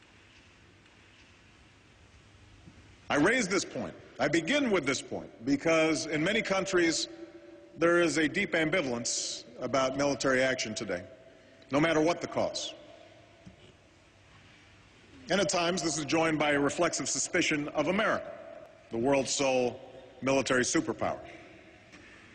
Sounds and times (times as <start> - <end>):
Narration, monologue: 0.0 - 22.3
Male speech, man speaking: 3.1 - 7.1, 7.8 - 11.1, 11.7 - 12.8, 15.3 - 18.3, 18.9 - 21.4.